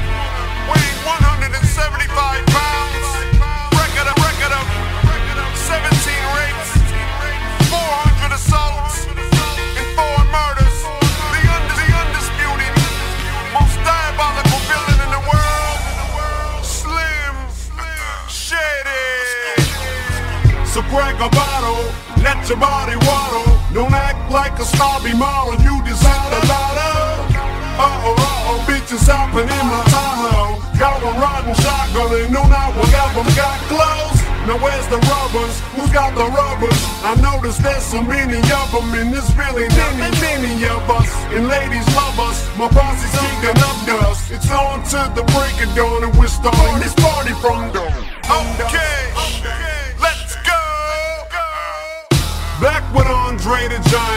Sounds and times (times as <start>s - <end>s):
Music: 0.0s - 54.1s
Rapping: 0.0s - 54.1s.